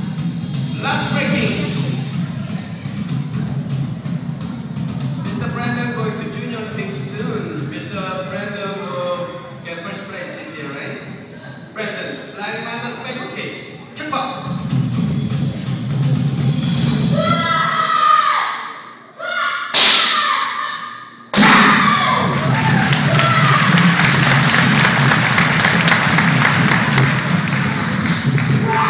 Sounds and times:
Music: 0.0s - 19.1s, 21.0s - 28.8s
Speech: 0.8s - 2.8s, 5.2s - 11.1s.

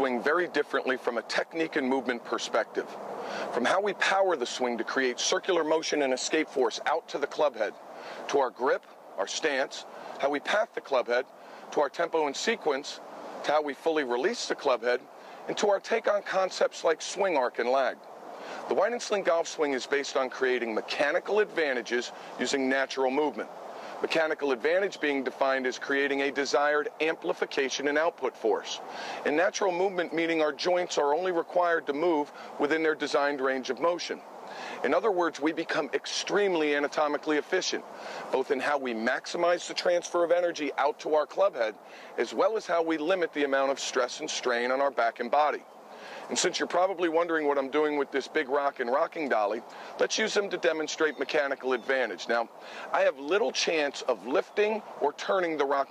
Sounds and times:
Speech: 0.0s - 18.0s, 18.6s - 34.2s, 34.8s - 45.6s, 46.2s - 55.9s
Rustling leaves: 0.0s - 55.9s.

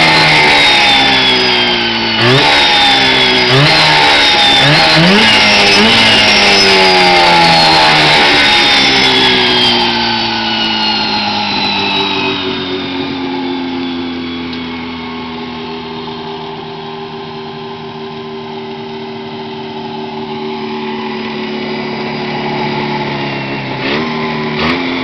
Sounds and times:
Medium engine (mid frequency): 0.0s - 25.0s
Vehicle: 0.0s - 25.0s.

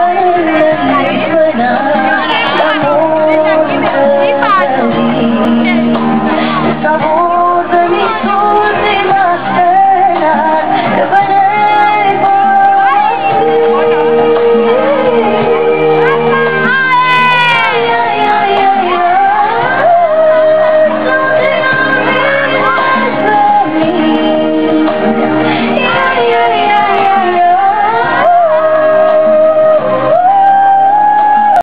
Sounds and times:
Music: 0.0s - 31.6s.

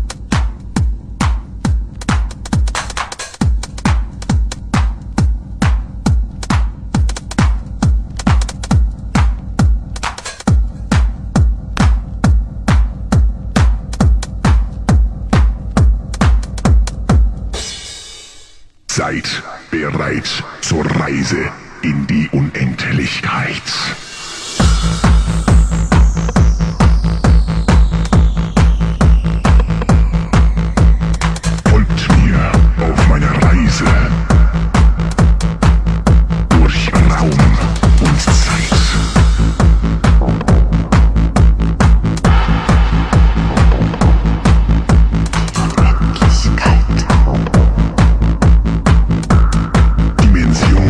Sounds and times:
Music: 0.0s - 50.9s
Speech: 18.9s - 24.0s, 31.7s - 34.5s, 36.5s - 39.1s, 45.6s - 47.6s, 50.2s - 50.9s.

